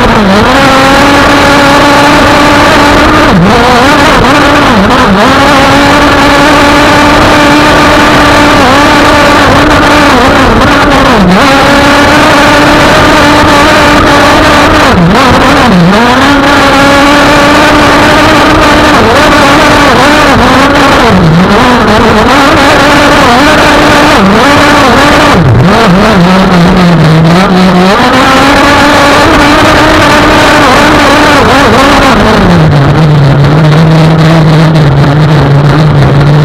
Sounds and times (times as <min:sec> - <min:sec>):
Motorboat, speedboat: 0:00.0 - 0:36.4.